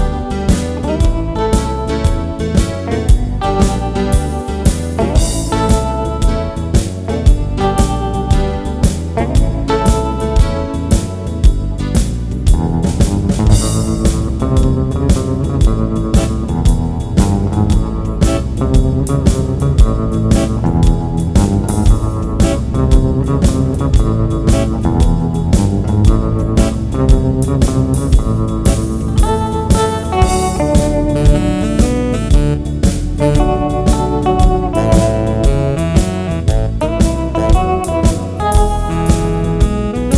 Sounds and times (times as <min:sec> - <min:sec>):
Bass guitar: 0:00.0 - 0:40.1.